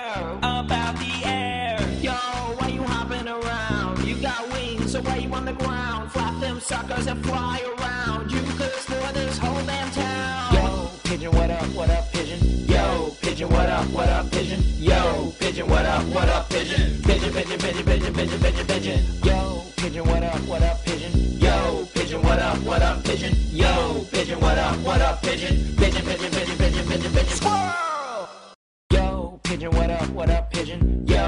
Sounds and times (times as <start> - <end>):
Music: 0.0 - 27.9, 28.9 - 31.2.